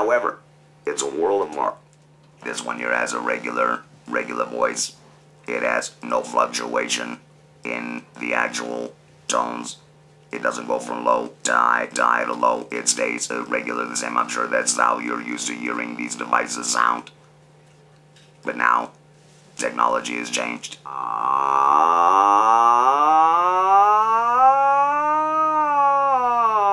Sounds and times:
Male speech, man speaking: 0.0 - 1.8, 2.4 - 17.2, 18.4 - 19.0, 19.6 - 20.9.

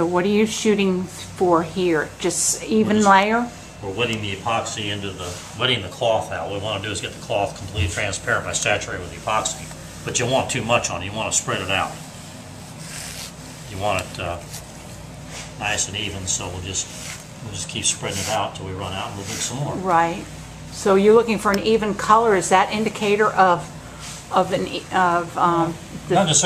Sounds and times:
Speech: 15.6 - 20.2.

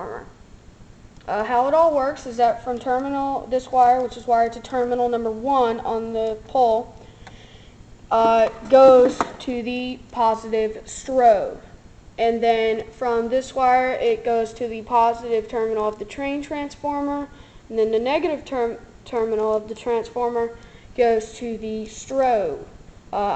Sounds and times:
Speech: 0.0 - 0.4, 1.2 - 7.0, 8.1 - 23.3.

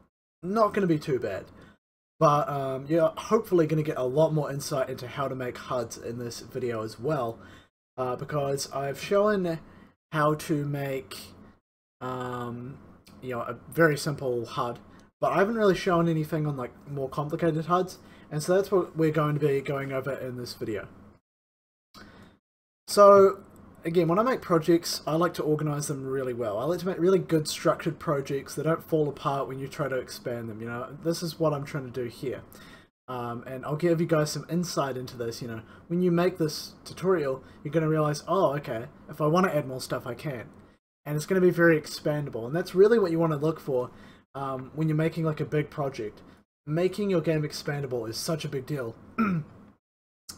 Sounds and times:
Speech: 0.4 - 1.5, 2.2 - 7.4, 8.0 - 11.4, 12.0 - 20.9, 22.9 - 32.5, 33.1 - 40.5, 41.1 - 49.4.

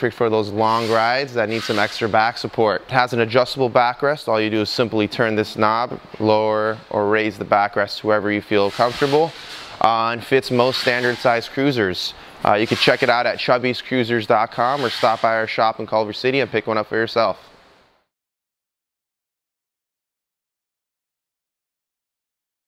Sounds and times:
Speech: 0.0 - 17.5.

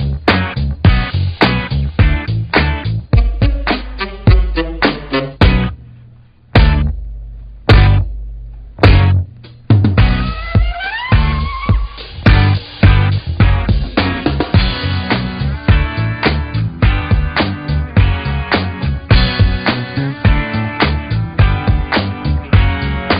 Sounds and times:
Music: 0.0 - 23.1.

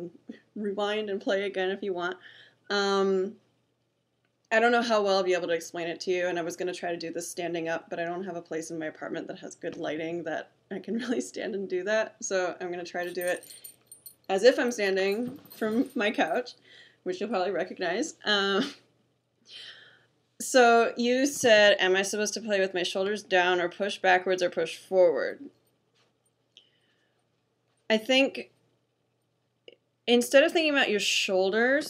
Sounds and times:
Speech: 0.0 - 3.4, 4.6 - 13.4, 14.3 - 18.8, 20.4 - 25.5, 27.9 - 28.5, 30.1 - 31.9.

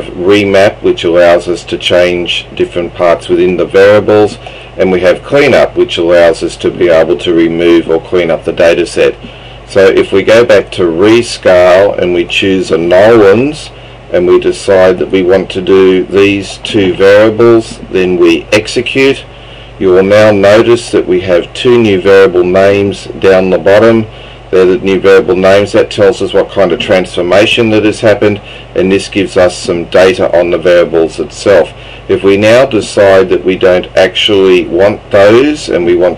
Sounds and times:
Speech: 0.0 - 36.1.

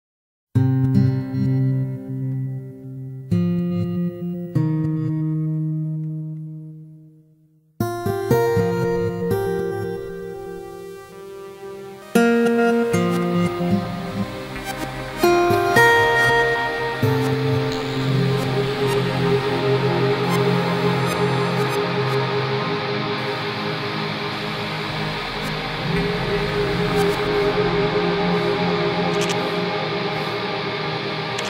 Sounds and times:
Electronic tuner: 0.6 - 31.4
Music: 0.6 - 31.4.

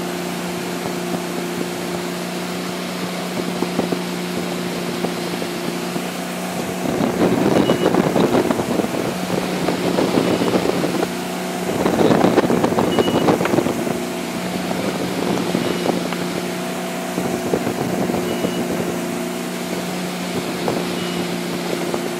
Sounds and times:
Motorboat, speedboat: 0.0 - 22.1
Ocean: 0.0 - 22.1
Wind noise (microphone): 0.6 - 22.1.

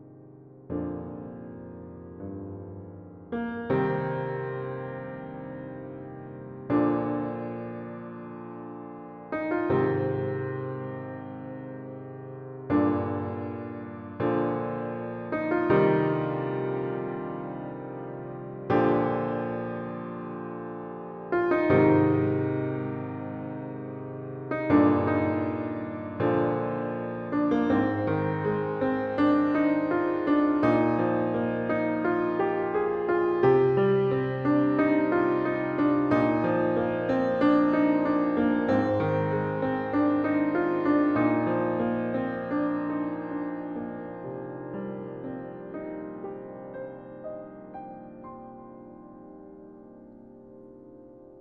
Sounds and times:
Music: 0.0 - 51.4.

